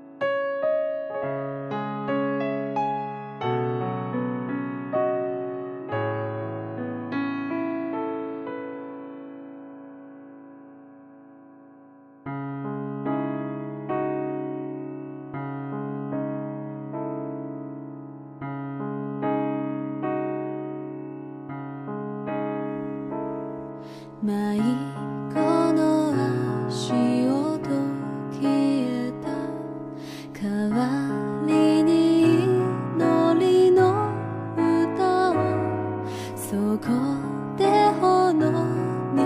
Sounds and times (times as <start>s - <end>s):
Music: 0.0s - 39.2s.